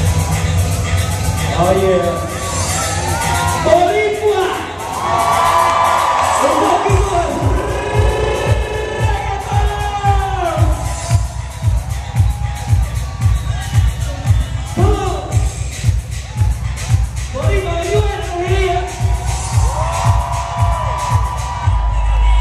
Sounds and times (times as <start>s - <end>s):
Music: 0.0s - 22.4s
Speech: 1.4s - 2.5s, 3.6s - 4.7s, 6.4s - 7.5s, 13.6s - 15.5s, 17.3s - 18.9s.